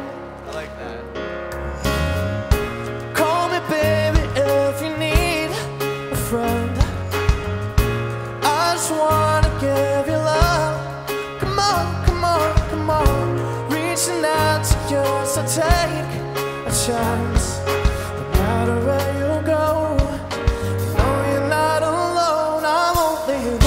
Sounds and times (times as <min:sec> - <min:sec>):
Music: 0:00.0 - 0:23.6.